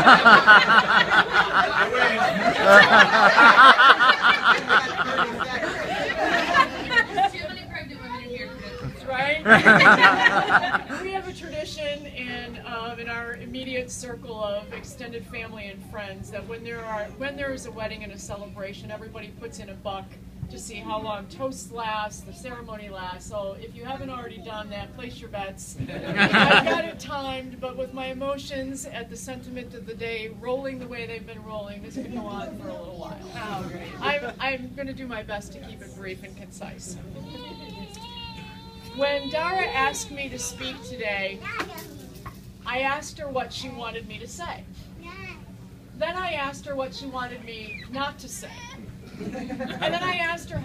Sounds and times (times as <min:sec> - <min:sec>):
Conversation: 0:00.0 - 0:50.6
Female speech, woman speaking: 0:04.7 - 0:38.0, 0:38.9 - 0:41.4, 0:42.6 - 0:44.7, 0:46.0 - 0:48.7, 0:49.7 - 0:50.6.